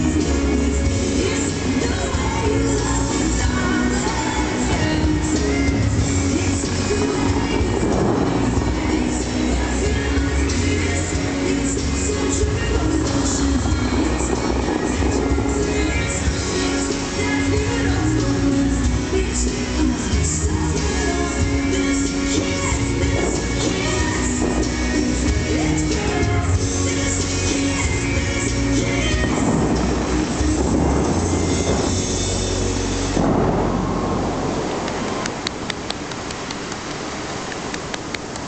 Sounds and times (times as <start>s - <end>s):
Music: 0.0s - 35.2s
Outside, urban or manmade: 0.0s - 38.4s.